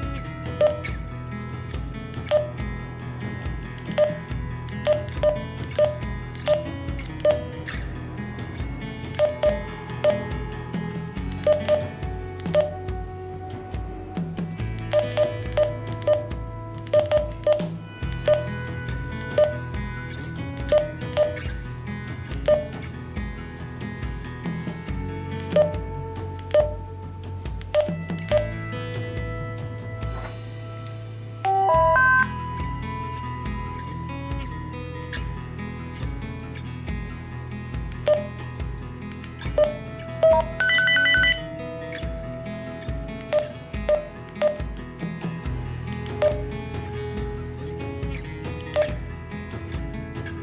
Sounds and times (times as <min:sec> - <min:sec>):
Music: 0:00.0 - 0:50.4.